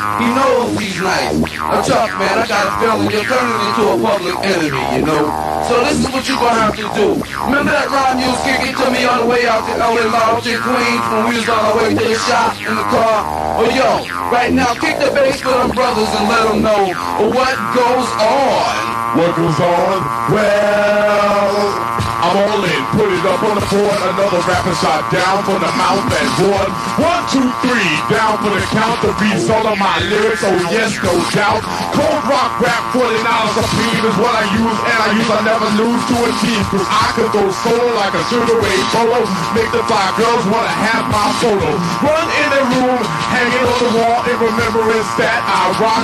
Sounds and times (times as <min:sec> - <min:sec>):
Music: 0:00.0 - 0:46.0.